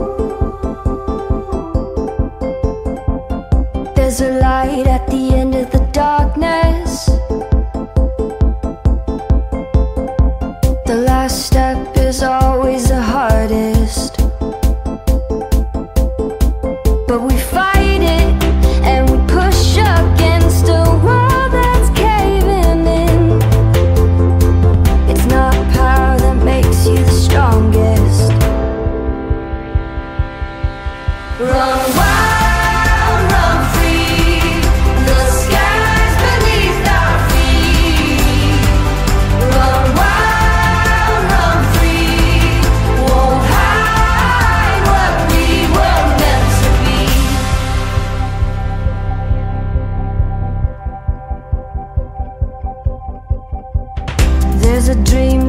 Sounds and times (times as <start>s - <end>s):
Music: 0.0s - 55.4s.